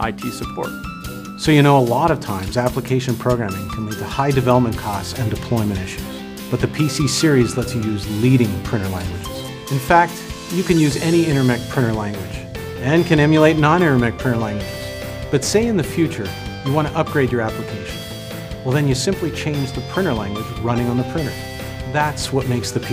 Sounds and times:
Speech: 0.0 - 0.7, 1.4 - 14.6, 15.4 - 18.0, 18.7 - 22.9
Music: 0.0 - 22.9.

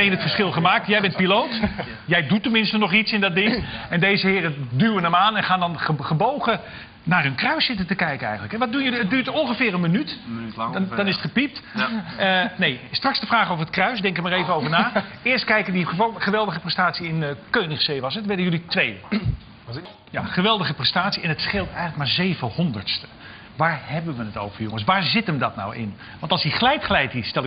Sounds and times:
Speech: 0.0 - 27.4.

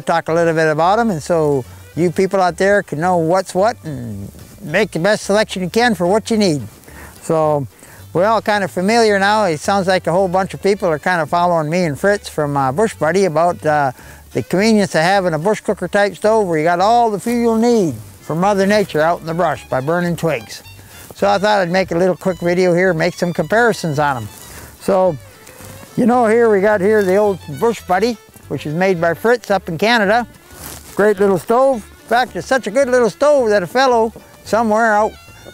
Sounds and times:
Speech: 0.0 - 20.6, 21.2 - 25.2, 25.9 - 30.3, 31.0 - 35.2
Music: 0.0 - 35.5.

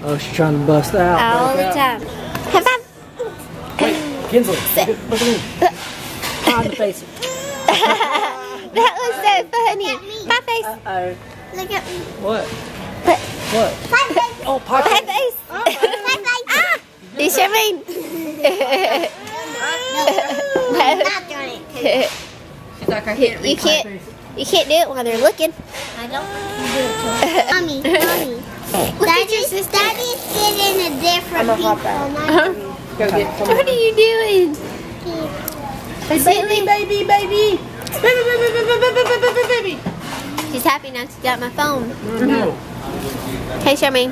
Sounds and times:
Inside, public space: 0.0 - 44.1.

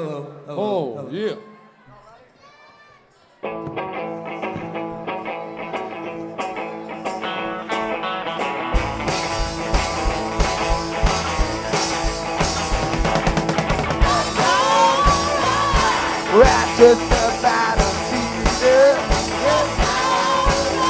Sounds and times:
Psychedelic rock: 3.7 - 20.9.

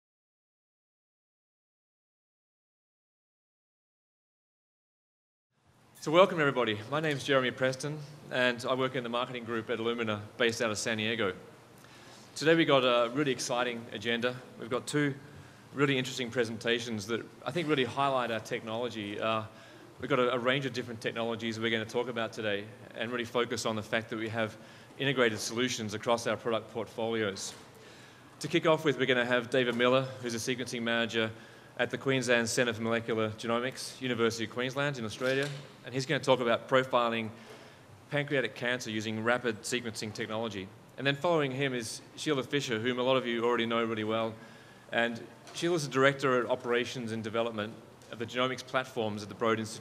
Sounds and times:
Speech: 6.0 - 11.5, 12.4 - 27.7, 28.4 - 37.4, 38.1 - 49.8.

